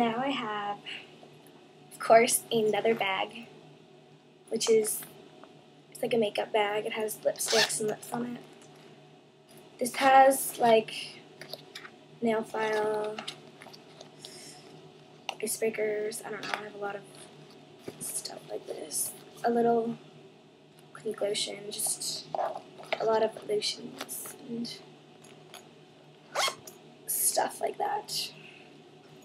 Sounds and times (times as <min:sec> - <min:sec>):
Speech: 0:00.0 - 0:01.0, 0:02.0 - 0:03.5, 0:04.5 - 0:05.1, 0:06.0 - 0:08.4, 0:09.8 - 0:11.2, 0:12.2 - 0:13.4, 0:15.4 - 0:17.1, 0:18.0 - 0:20.0, 0:21.0 - 0:24.8, 0:27.1 - 0:28.4
Inside, small room: 0:00.0 - 0:29.2.